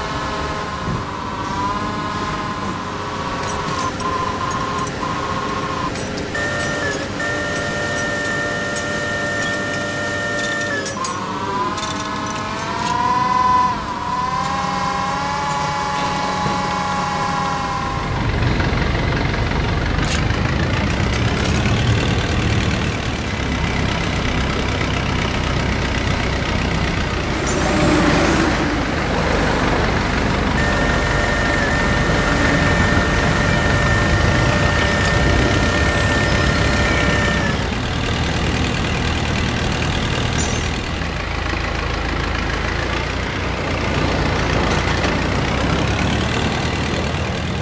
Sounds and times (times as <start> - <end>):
Vehicle: 0.0 - 47.6.